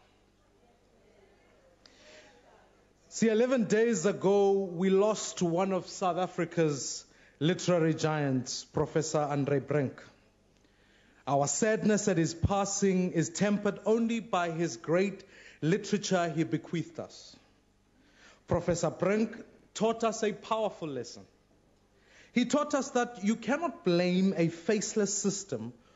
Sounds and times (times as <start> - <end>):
Narration, monologue: 1.8 - 25.9
Male speech, man speaking: 3.1 - 10.2, 11.3 - 17.4, 18.5 - 21.3, 22.4 - 25.7.